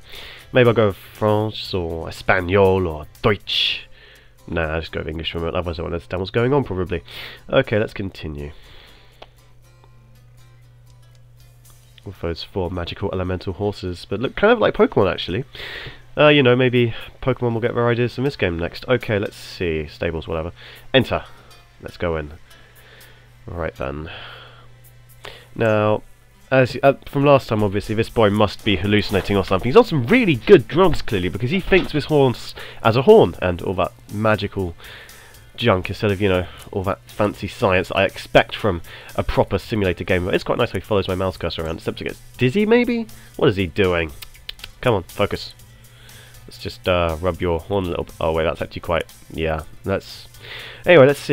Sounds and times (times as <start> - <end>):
Music: 0.0 - 51.3
Speech: 0.5 - 3.9, 4.5 - 8.6, 12.0 - 15.5, 16.2 - 22.4, 23.5 - 24.2, 25.6 - 34.8, 35.6 - 44.2, 44.8 - 45.6, 46.5 - 50.3, 50.9 - 51.3.